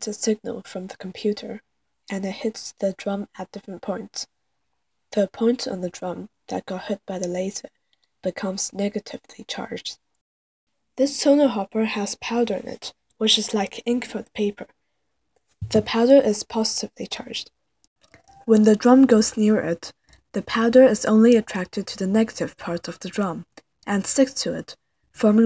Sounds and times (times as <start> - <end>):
Speech: 0.0 - 4.3, 5.1 - 10.0, 11.0 - 14.7, 15.6 - 17.5, 18.4 - 25.4.